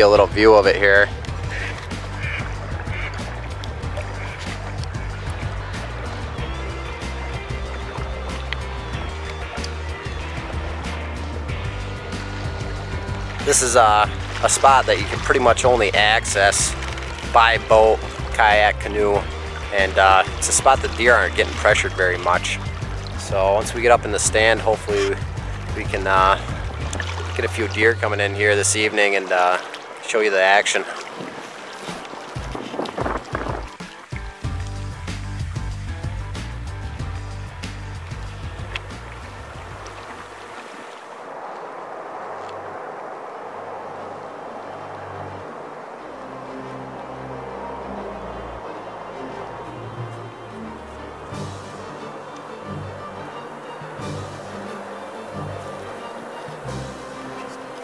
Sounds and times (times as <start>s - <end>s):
Speech: 0.0s - 1.1s, 13.5s - 22.6s, 23.2s - 25.2s, 25.8s - 26.5s, 27.4s - 31.0s
Music: 0.0s - 40.6s, 44.6s - 57.8s
Sailboat, sailing ship: 0.0s - 57.8s.